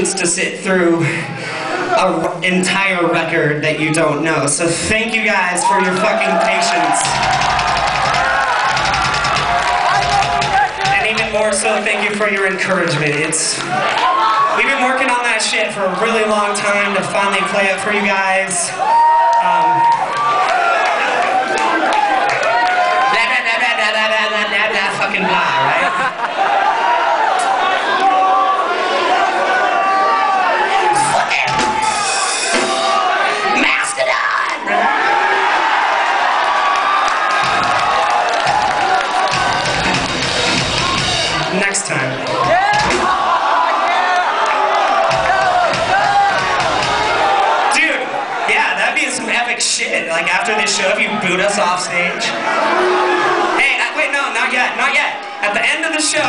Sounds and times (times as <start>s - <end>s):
Speech: 0.0s - 1.2s, 2.0s - 7.1s, 10.9s - 13.6s, 14.6s - 18.8s, 23.1s - 26.0s, 41.4s - 42.2s, 47.7s - 52.4s, 53.6s - 56.2s.